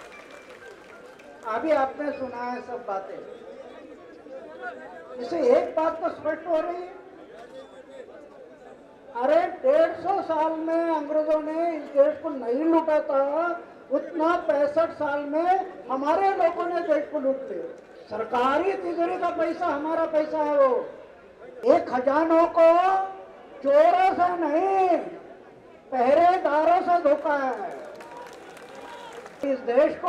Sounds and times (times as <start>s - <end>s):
Narration, monologue: 0.8s - 7.2s, 8.0s - 27.9s, 29.4s - 30.0s
Male speech, man speaking: 1.4s - 25.2s, 25.9s - 27.8s, 29.4s - 30.0s.